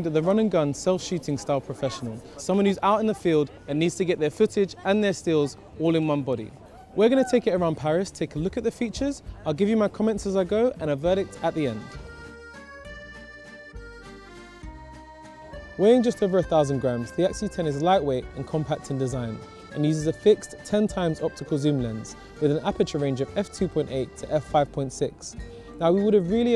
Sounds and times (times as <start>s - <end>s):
Speech: 0.0s - 12.0s, 15.8s - 26.5s
Music: 7.8s - 26.5s.